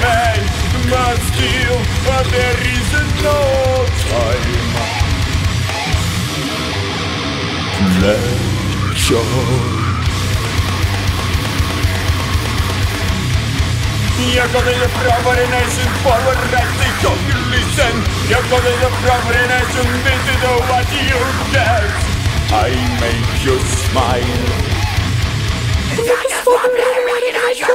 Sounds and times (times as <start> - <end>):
Music: 0.0 - 27.7.